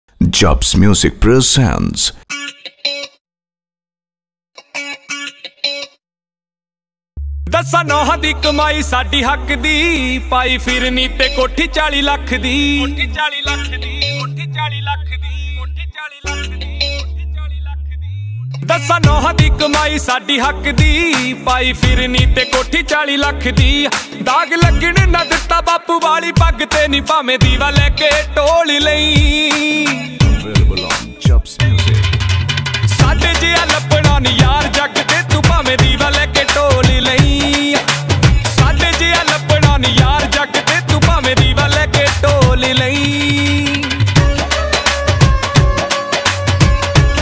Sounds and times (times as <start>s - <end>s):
Speech: 0.2s - 2.2s, 30.4s - 31.6s
Music: 2.3s - 3.2s, 4.6s - 6.0s, 7.2s - 47.2s.